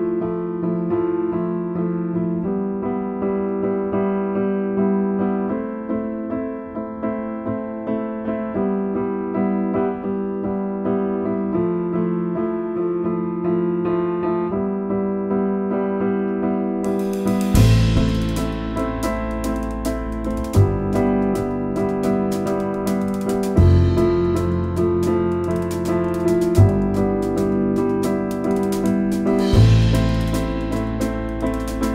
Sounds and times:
Electric piano: 0.0s - 31.9s.

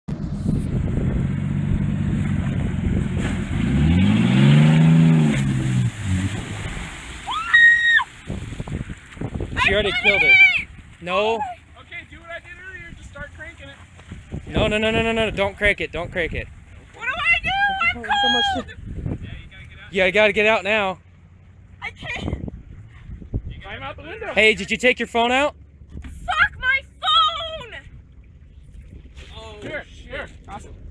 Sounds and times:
Outside, rural or natural: 0.0s - 30.9s
Car: 0.1s - 30.9s.

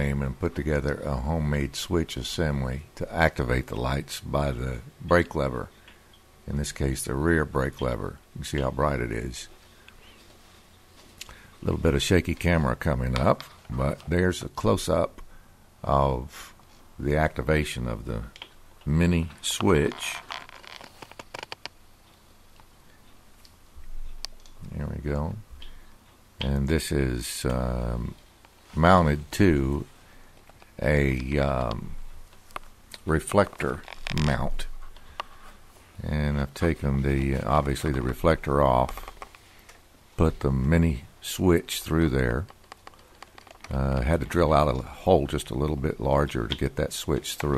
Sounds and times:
Speech: 0.0s - 5.7s, 6.5s - 9.6s, 11.6s - 15.2s, 15.8s - 20.3s, 24.6s - 25.5s, 26.4s - 29.9s, 30.8s - 32.1s, 32.9s - 34.8s, 36.0s - 39.2s, 40.2s - 42.6s, 43.7s - 47.5s.

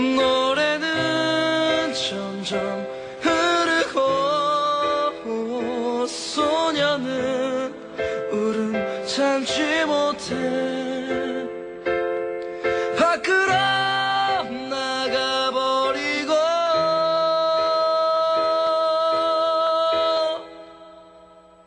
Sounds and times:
Music: 0.0s - 21.6s.

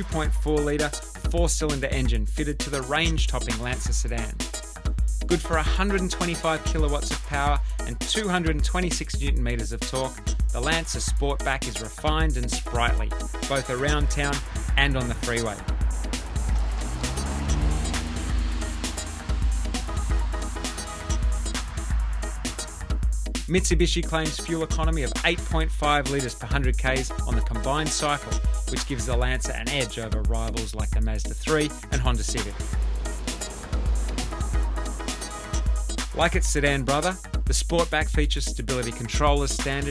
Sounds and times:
Speech: 0.0s - 4.4s, 5.3s - 15.6s, 23.5s - 32.6s, 36.2s - 39.9s
Music: 0.0s - 39.9s.

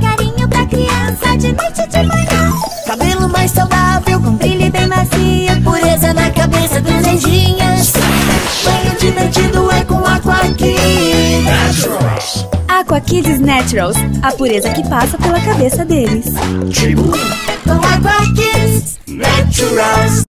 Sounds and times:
Jingle (music): 0.0s - 20.2s
Speech: 11.6s - 17.2s.

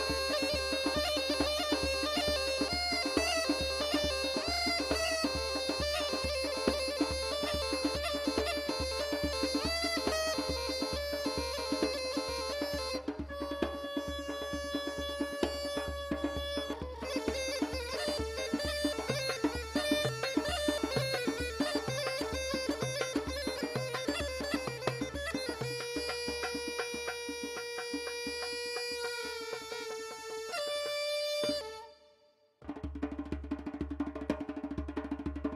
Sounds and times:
Music: 0.0s - 35.5s.

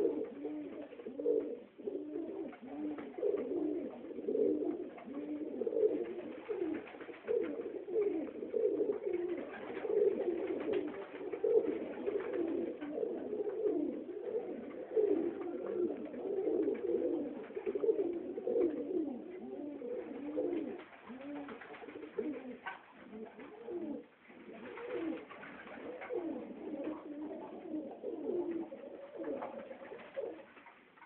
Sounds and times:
Coo: 0.0s - 31.0s.

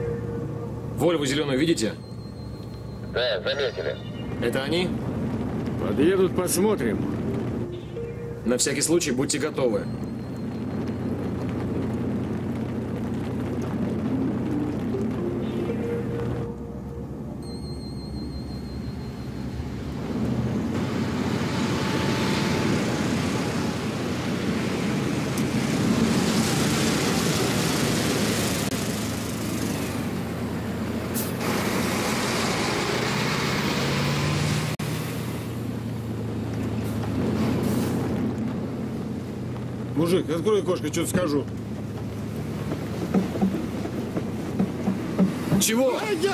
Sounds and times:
Car passing by: 19.6s - 40.2s.

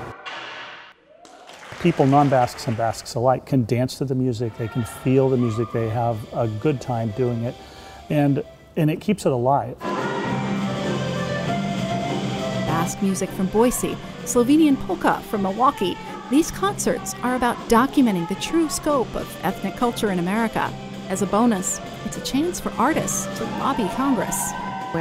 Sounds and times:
Speech: 1.8s - 7.5s, 12.7s - 24.4s
Happy music: 5.1s - 25.0s.

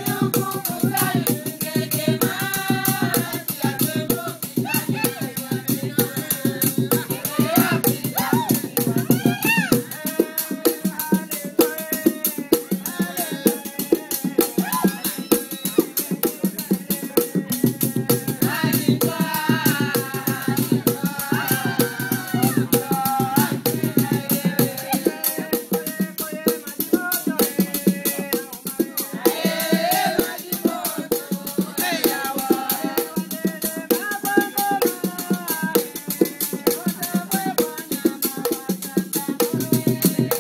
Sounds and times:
Choir: 0.0s - 40.4s
Female singing: 0.0s - 40.4s
Male singing: 0.0s - 40.4s.

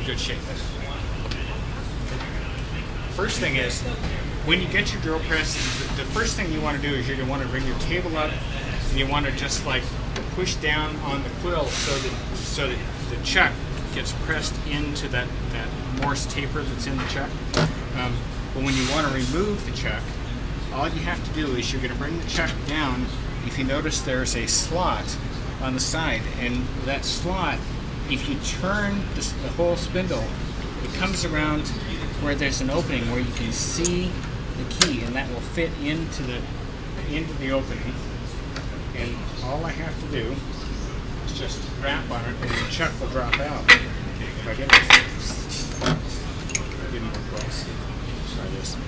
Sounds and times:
Speech: 0.0s - 38.2s, 38.9s - 46.0s, 46.6s - 48.8s.

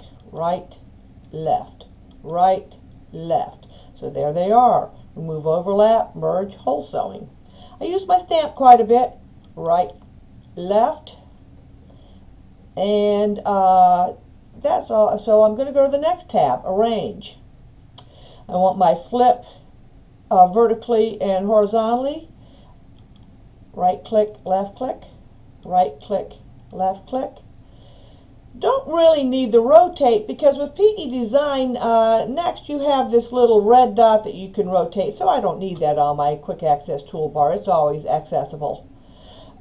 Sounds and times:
Inside, small room: 0.0s - 39.6s
Speech: 0.3s - 10.0s, 10.6s - 11.2s, 12.8s - 17.4s, 18.5s - 19.5s, 20.3s - 22.3s, 23.8s - 25.1s, 25.7s - 27.4s, 28.6s - 38.8s.

